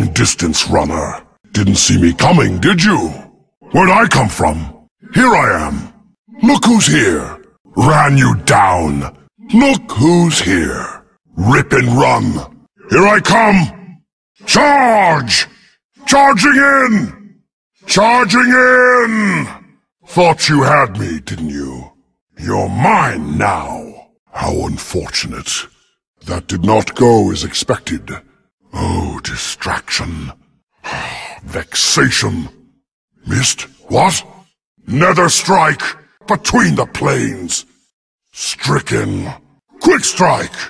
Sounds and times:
Speech: 0.0 - 37.7, 38.3 - 40.6.

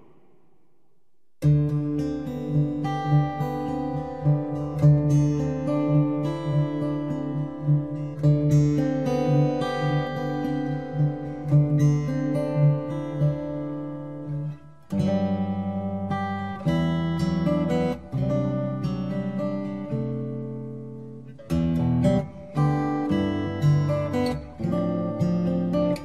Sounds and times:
Acoustic guitar: 0.0 - 26.0.

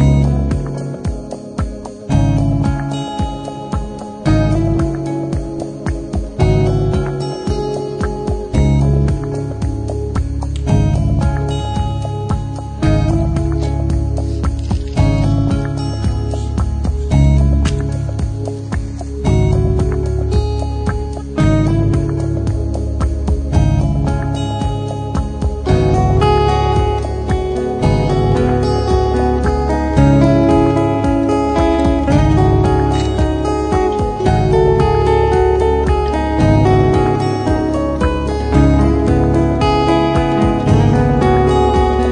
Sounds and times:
Music: 0.0 - 42.1.

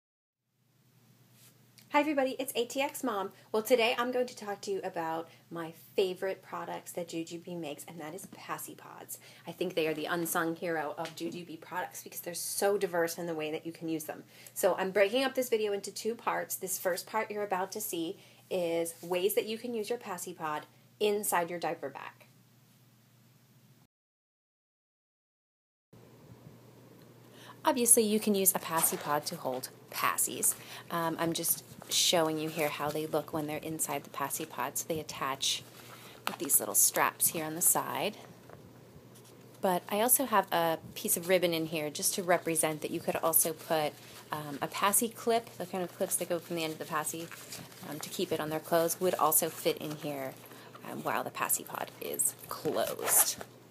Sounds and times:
Speech: 1.8 - 22.3, 27.6 - 35.7, 36.3 - 38.3, 39.6 - 53.4.

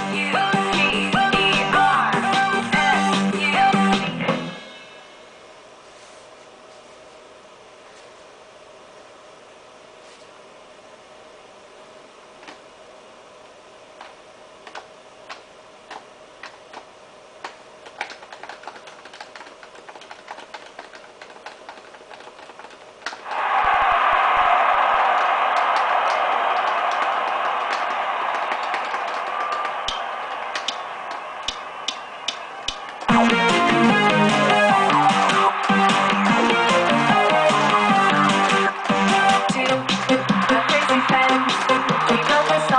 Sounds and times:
Guitar: 0.0 - 4.8, 33.1 - 42.7.

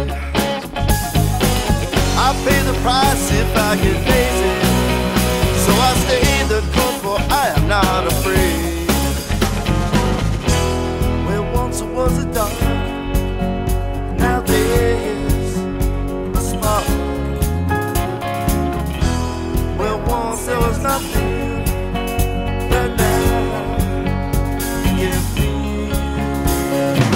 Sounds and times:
Music: 0.0 - 27.1.

